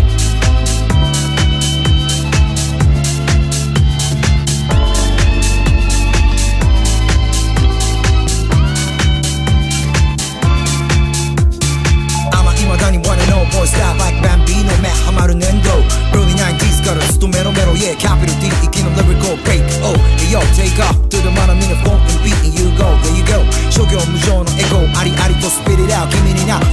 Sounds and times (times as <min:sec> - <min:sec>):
Disco: 0:00.0 - 0:26.7.